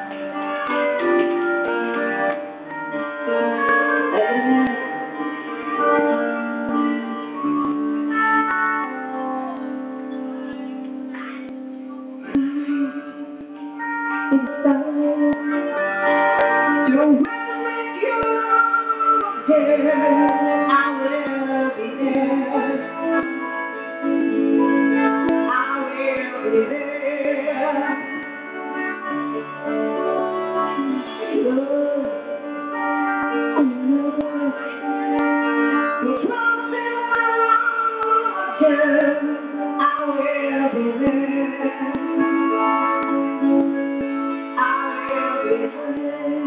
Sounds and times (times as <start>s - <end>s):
Music: 0.0s - 46.4s.